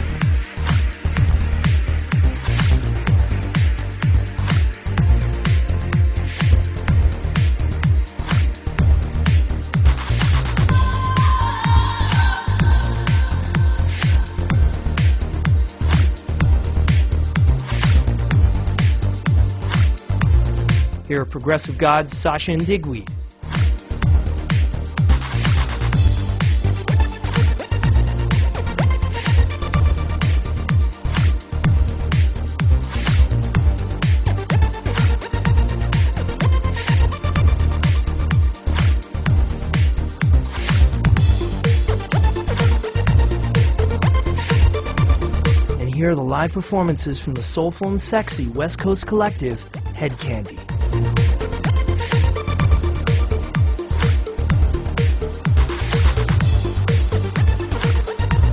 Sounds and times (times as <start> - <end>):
Trance music: 0.0 - 58.5.